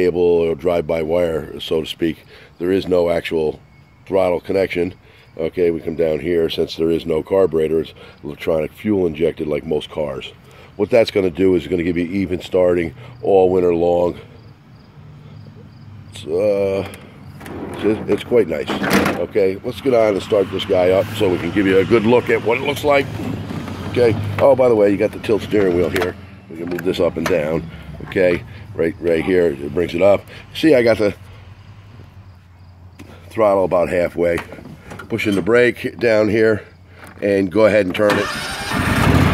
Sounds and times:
Speech: 0.0s - 14.2s, 16.2s - 16.9s, 17.8s - 23.1s, 23.9s - 31.2s, 33.3s - 38.2s
Vehicle: 0.0s - 39.3s.

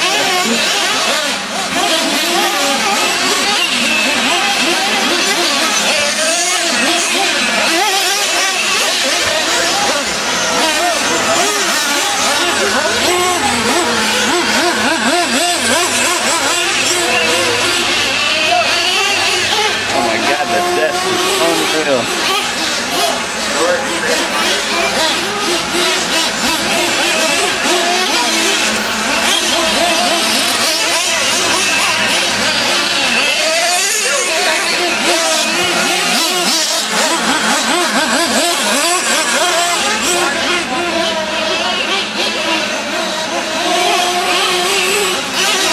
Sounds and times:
Car: 0.0s - 45.7s
Speech: 19.9s - 22.4s.

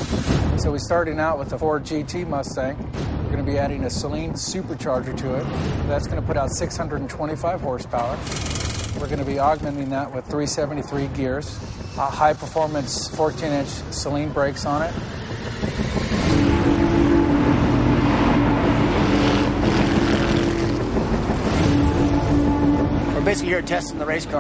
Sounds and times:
Music: 0.0s - 24.4s
Speech: 0.6s - 8.2s, 9.0s - 14.9s, 23.2s - 24.4s.

